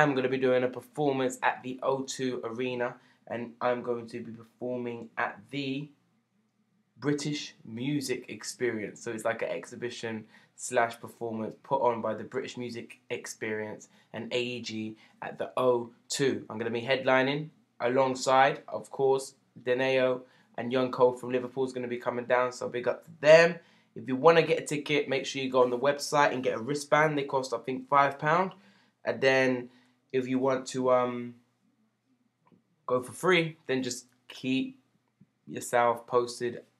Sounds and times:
Speech: 0.0 - 5.9, 7.0 - 31.4, 32.9 - 34.8, 35.5 - 36.8.

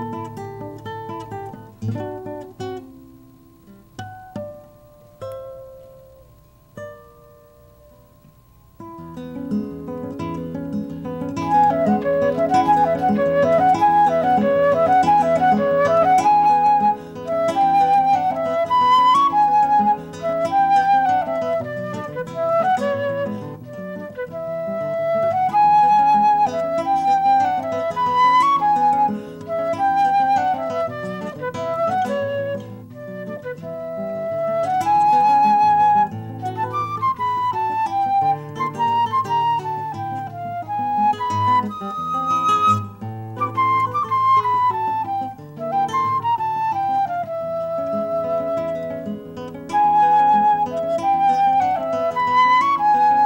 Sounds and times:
Flute: 0.0 - 2.8, 11.1 - 53.2
Guitar: 0.0 - 53.2.

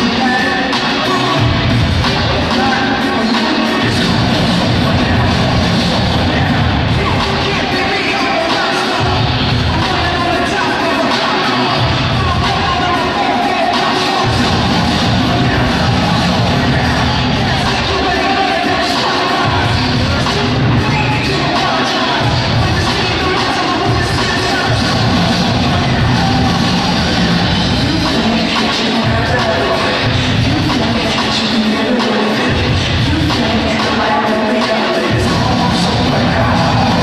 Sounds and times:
Music: 0.0 - 37.0
Speech: 0.0 - 37.0.

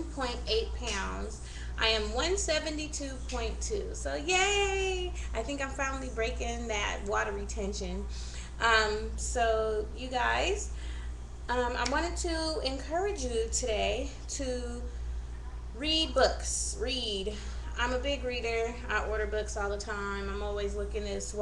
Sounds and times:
Speech: 0.0 - 10.7, 11.5 - 21.4.

